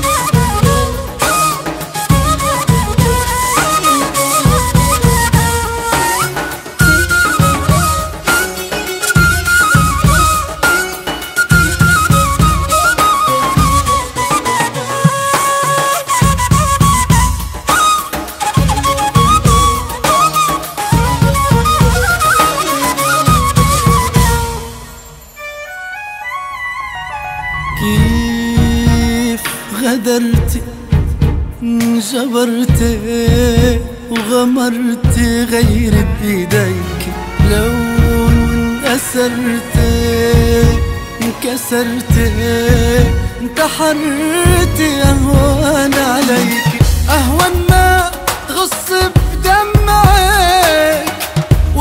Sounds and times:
Flute: 0.0 - 30.6, 31.6 - 51.8.

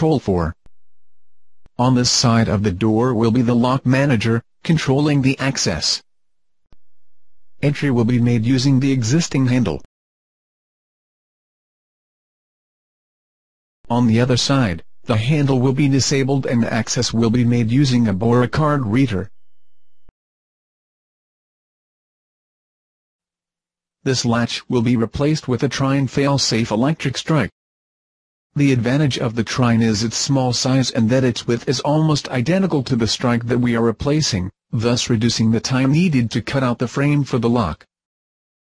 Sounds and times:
Speech: 0.0 - 0.6, 1.8 - 6.1, 7.6 - 9.9, 13.9 - 19.3, 24.1 - 27.6, 28.6 - 37.9.

